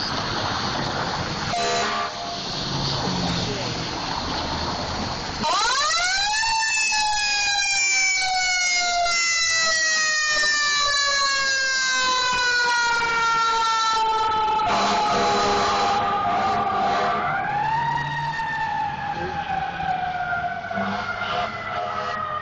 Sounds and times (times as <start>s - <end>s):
Car: 0.0s - 7.7s, 15.0s - 22.4s
Fire engine, fire truck (siren): 0.0s - 22.4s.